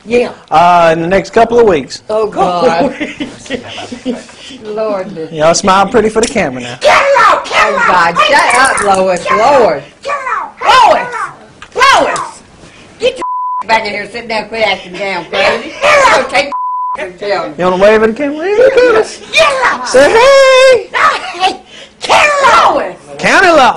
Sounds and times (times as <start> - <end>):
Inside, small room: 0.0 - 23.7.